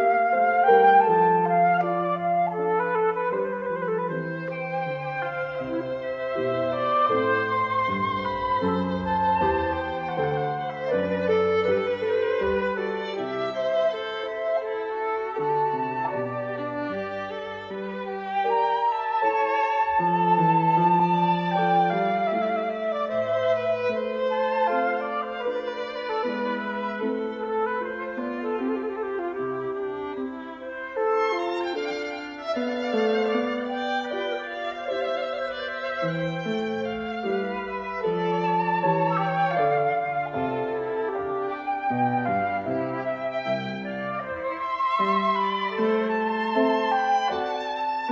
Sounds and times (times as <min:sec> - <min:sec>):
Musical instrument: 0:00.0 - 0:48.1.